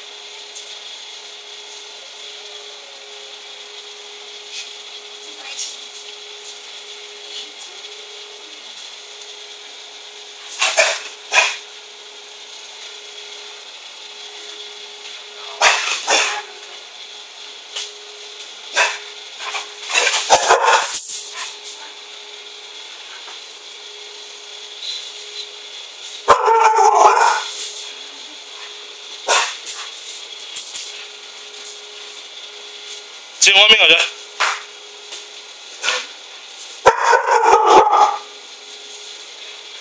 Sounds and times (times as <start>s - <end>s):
Dog: 10.7s - 11.6s, 15.6s - 16.4s, 18.8s - 20.9s, 29.3s - 29.6s, 36.9s - 38.3s.